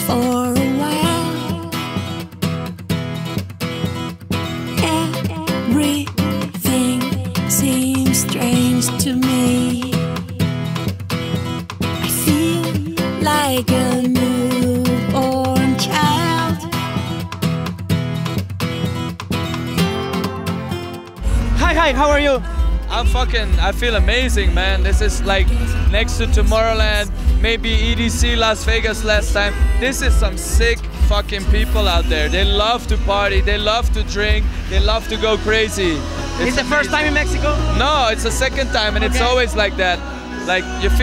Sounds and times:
Music: 0:00.0 - 0:41.0
Speech: 0:21.6 - 0:41.0.

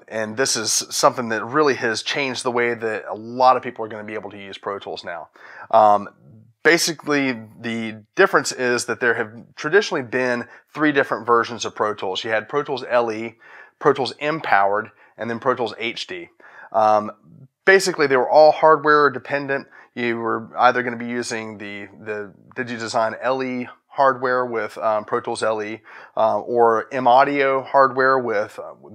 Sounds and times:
Speech: 0:00.0 - 0:28.9.

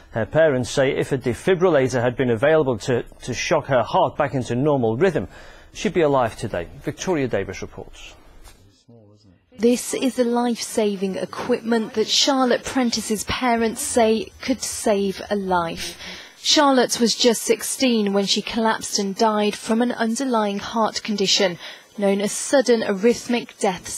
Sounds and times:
Television: 0:00.0 - 0:23.9
Speech: 0:00.2 - 0:23.9.

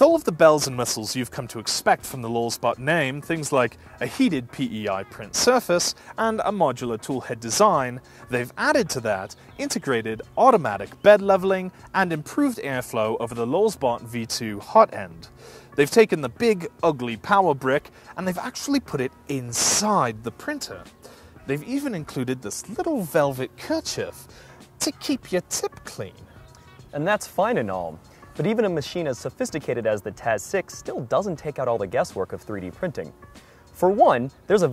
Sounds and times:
Speech: 0:00.0 - 0:20.9, 0:21.5 - 0:24.2, 0:24.8 - 0:26.2, 0:26.9 - 0:33.2, 0:33.8 - 0:34.7.

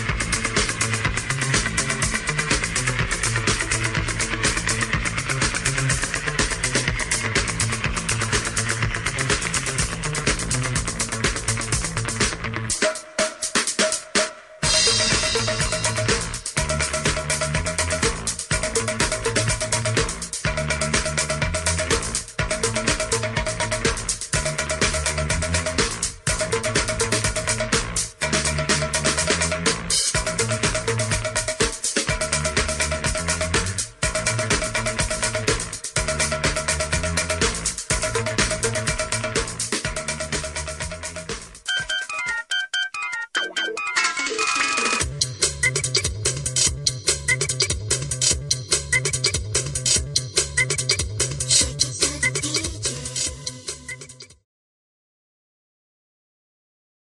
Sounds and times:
Music: 0:00.0 - 0:54.4.

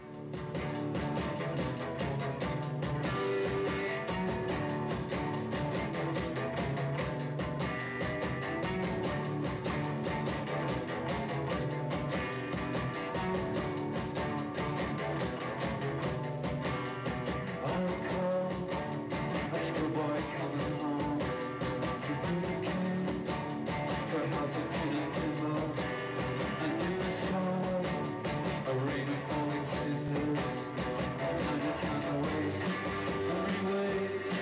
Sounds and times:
Music: 0:00.0 - 0:34.4.

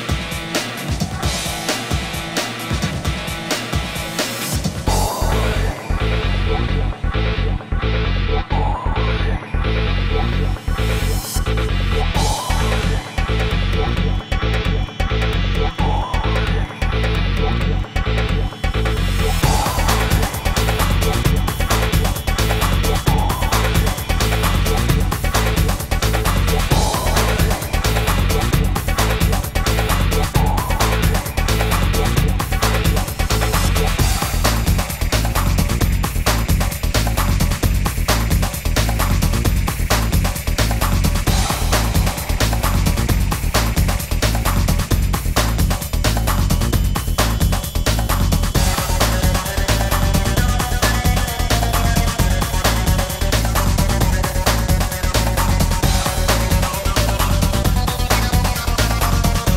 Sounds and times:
Soundtrack music: 0:00.0 - 0:59.5.

